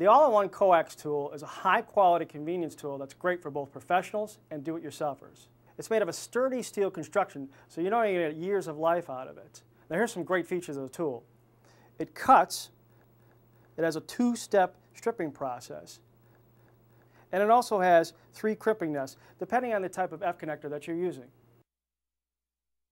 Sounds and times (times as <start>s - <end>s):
Speech: 0.0s - 11.3s, 12.0s - 12.8s, 13.8s - 16.0s, 17.3s - 21.3s.